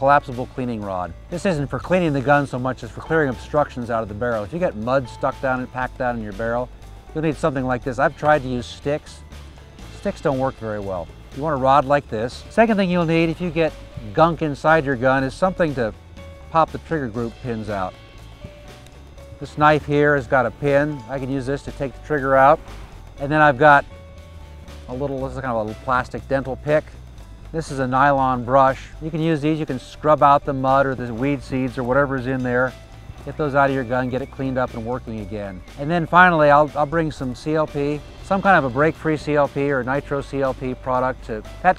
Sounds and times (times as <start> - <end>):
Speech: 0.0 - 9.2, 10.0 - 15.9, 16.5 - 17.9, 19.4 - 22.6, 23.2 - 23.9, 24.9 - 26.9, 27.6 - 41.7
Music: 0.0 - 41.7.